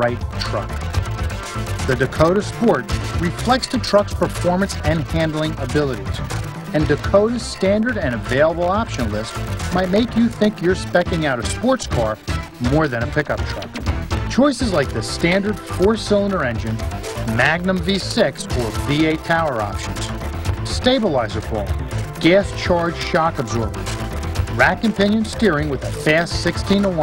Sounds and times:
Speech: 0:00.0 - 0:00.7, 0:01.9 - 0:13.7, 0:14.3 - 0:20.1, 0:20.7 - 0:23.7, 0:24.6 - 0:27.0
Music: 0:00.0 - 0:27.0.

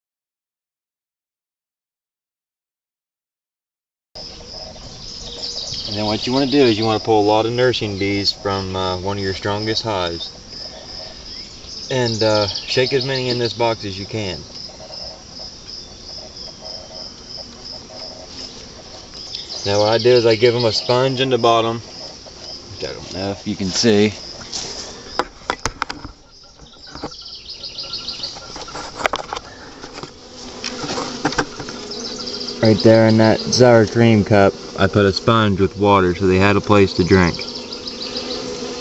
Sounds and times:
Bee, wasp, etc.: 0:04.2 - 0:38.8
Fly, housefly: 0:04.2 - 0:38.8.

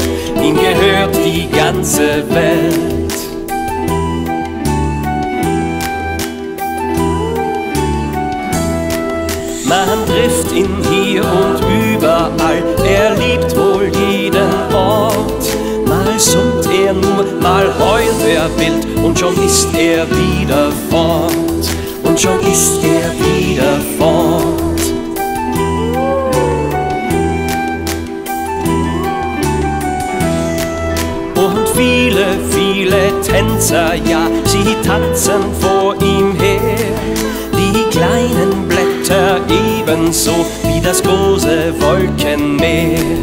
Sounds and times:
Music: 0:00.0 - 0:43.2.

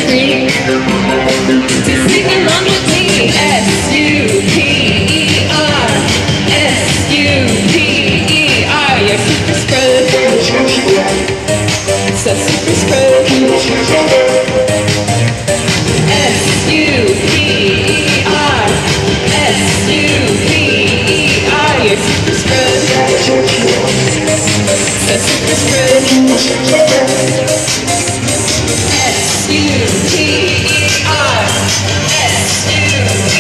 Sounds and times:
Inside, large room or hall: 0:00.0 - 0:33.4
Music: 0:00.0 - 0:33.4.

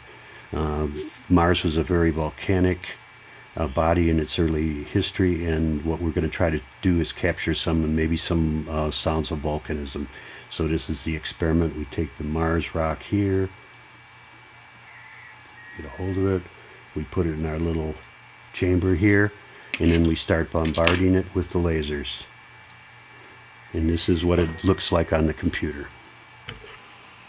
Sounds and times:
Speech: 0:00.5 - 0:03.0, 0:03.6 - 0:13.6, 0:15.8 - 0:22.4, 0:23.7 - 0:26.0.

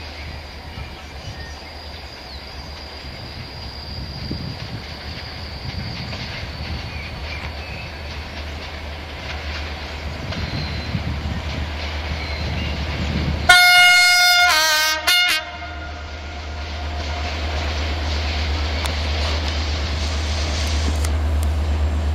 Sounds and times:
Railroad car, train wagon: 0:00.0 - 0:22.1
Train: 0:00.0 - 0:22.1.

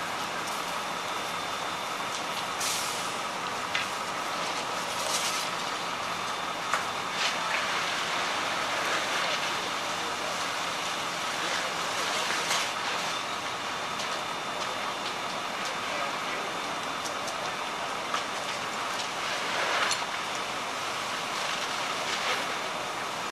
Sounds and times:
Crackle: 0:00.0 - 0:23.3.

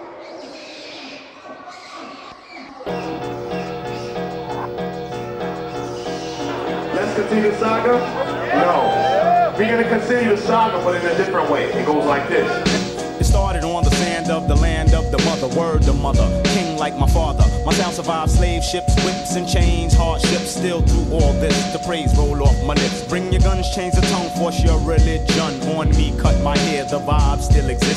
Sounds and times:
Exciting music: 0:02.9 - 0:27.9.

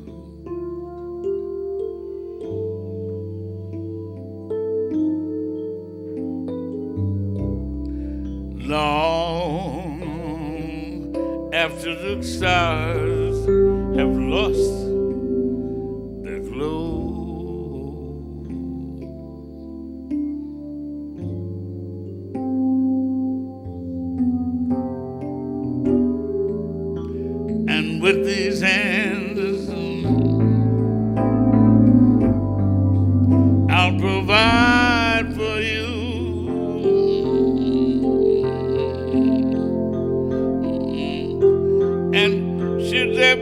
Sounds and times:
Music: 0:00.0 - 0:43.4.

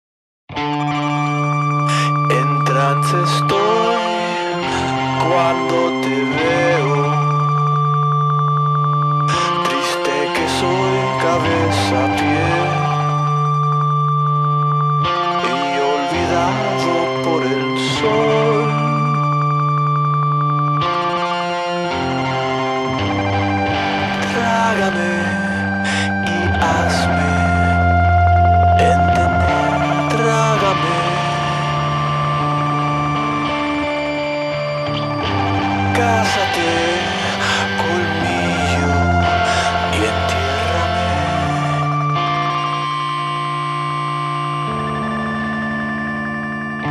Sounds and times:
Music: 0:00.5 - 0:46.9
Singing: 0:09.3 - 0:13.6, 0:15.4 - 0:19.3, 0:35.8 - 0:42.0.

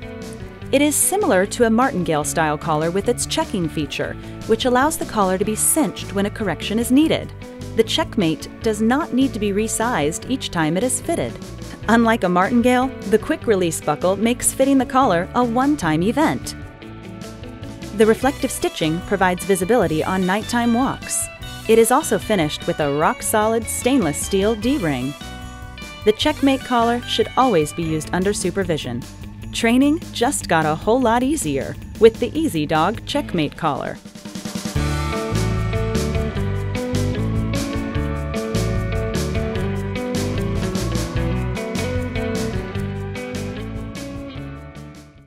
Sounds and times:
Music: 0:00.0 - 0:45.2
Speech: 0:00.8 - 0:16.6, 0:18.0 - 0:25.2, 0:26.1 - 0:29.0, 0:29.6 - 0:34.0.

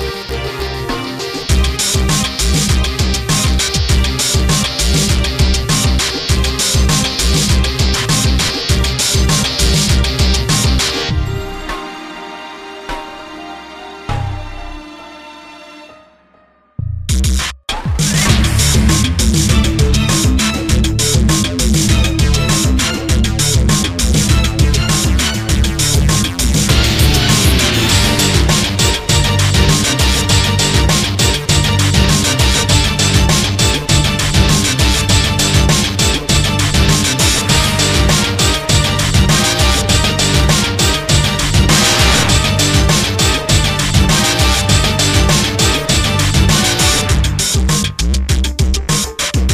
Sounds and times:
Music: 0:00.0 - 0:49.5.

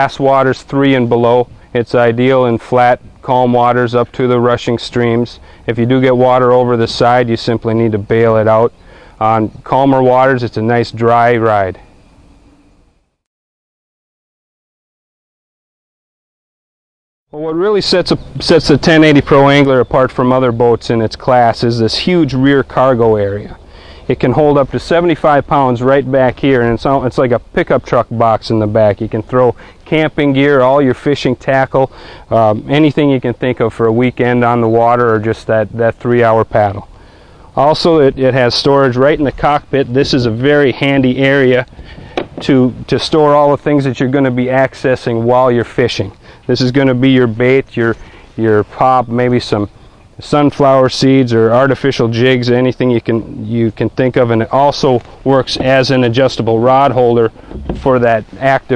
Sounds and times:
Speech: 0:00.0 - 0:11.8, 0:17.4 - 0:36.9, 0:37.6 - 0:41.7, 0:42.4 - 0:58.7.

